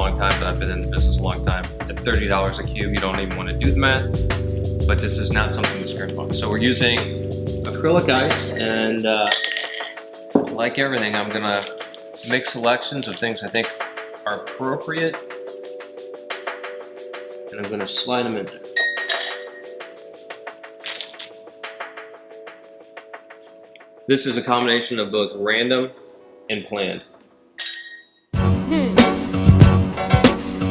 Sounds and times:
Speech: 0:00.0 - 0:04.1, 0:04.9 - 0:09.4, 0:10.6 - 0:15.2, 0:17.5 - 0:18.6, 0:24.1 - 0:27.0, 0:28.7 - 0:29.0
Music: 0:00.0 - 0:27.6, 0:28.3 - 0:30.7
Glass: 0:08.1 - 0:10.7, 0:18.8 - 0:19.7, 0:20.8 - 0:21.4, 0:27.6 - 0:28.2.

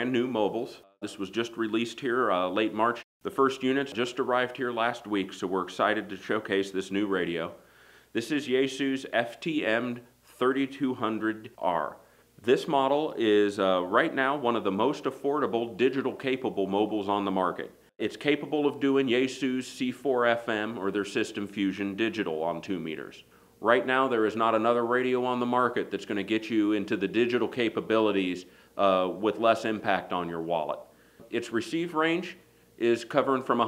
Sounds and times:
Speech: 0:00.0 - 0:07.6, 0:08.2 - 0:33.6.

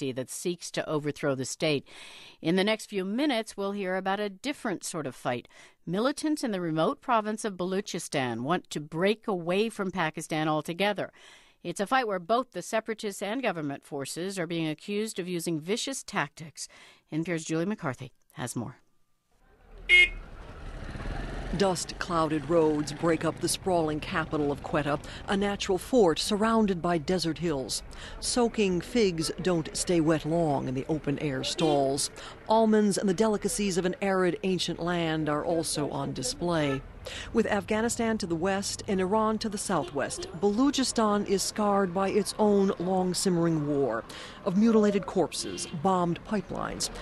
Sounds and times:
Speech: 0:02.4 - 0:11.1, 0:11.7 - 0:18.8, 0:21.6 - 0:47.0.

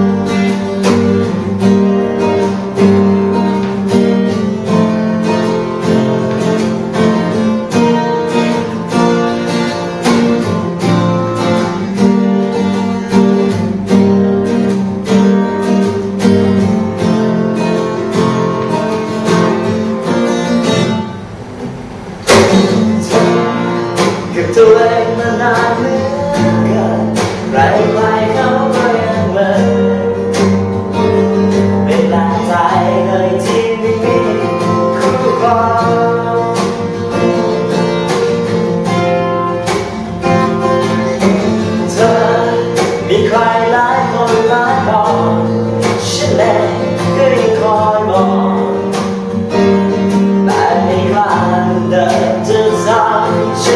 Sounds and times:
Music: 0:00.0 - 0:53.7.

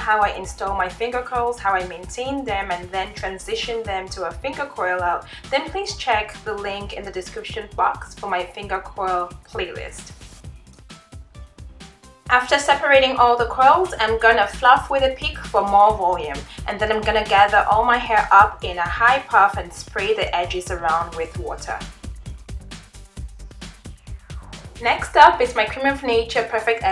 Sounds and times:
Speech: 0:00.0 - 0:10.1, 0:12.3 - 0:21.9, 0:24.8 - 0:26.9
Music: 0:00.0 - 0:26.9.

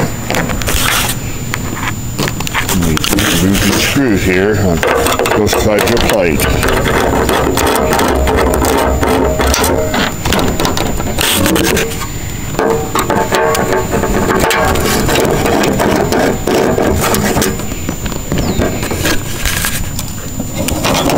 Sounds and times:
Speech: 0:02.7 - 0:06.5.

